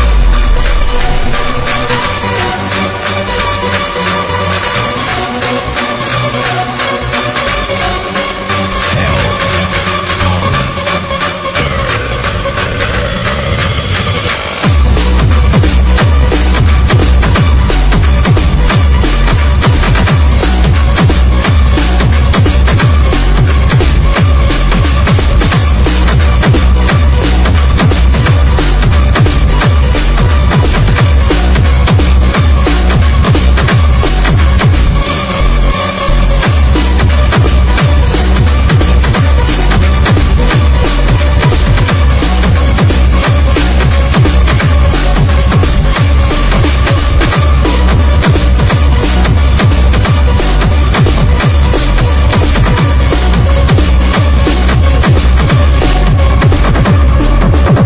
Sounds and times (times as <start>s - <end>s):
Electronic dance music: 0.0s - 57.8s
Happy music: 0.0s - 57.8s.